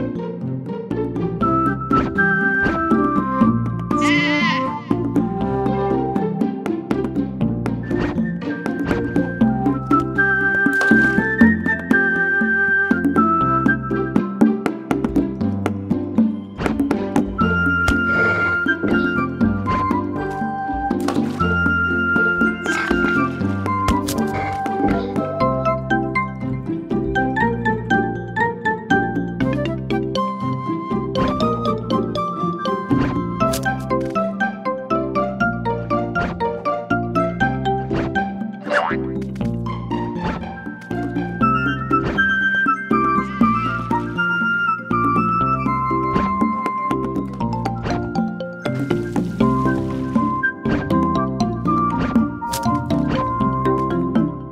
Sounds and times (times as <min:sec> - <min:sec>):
Music: 0:00.0 - 0:54.5.